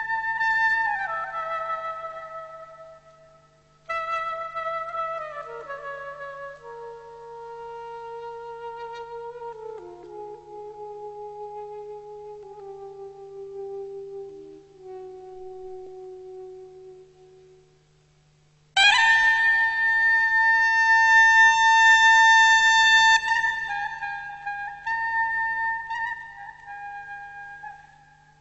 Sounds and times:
Music: 0.0s - 28.4s.

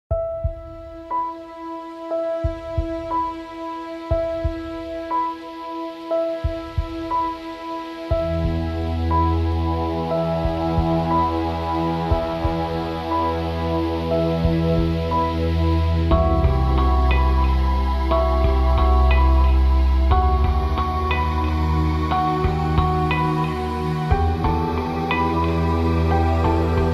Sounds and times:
Ambient music: 0.1s - 26.9s.

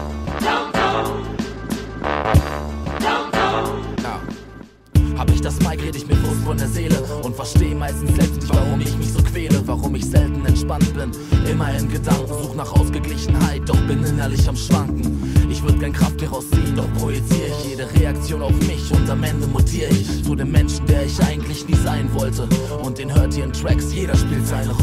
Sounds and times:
Music: 0.0s - 24.8s.

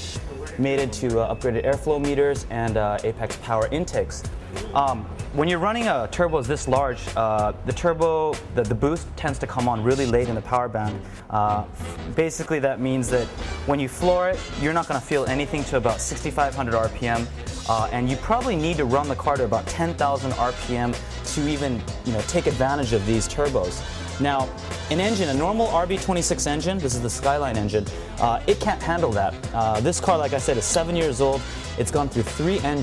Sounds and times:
Music: 0.0s - 32.8s
Speech: 0.0s - 32.8s.

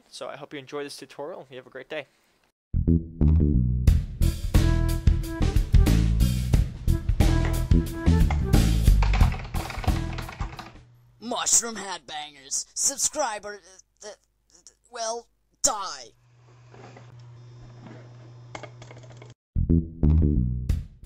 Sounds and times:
Speech: 0.0s - 2.1s, 11.2s - 16.2s
Music: 2.8s - 10.8s, 19.6s - 21.0s.

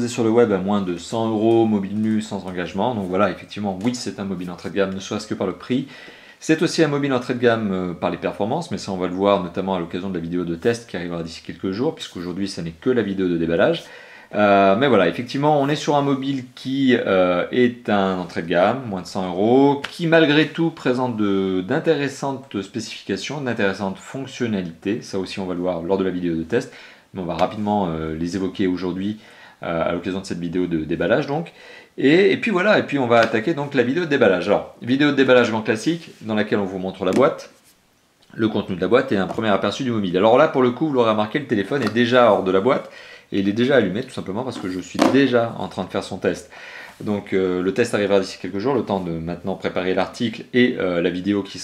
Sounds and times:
Speech: 0.0s - 37.6s, 38.3s - 51.6s.

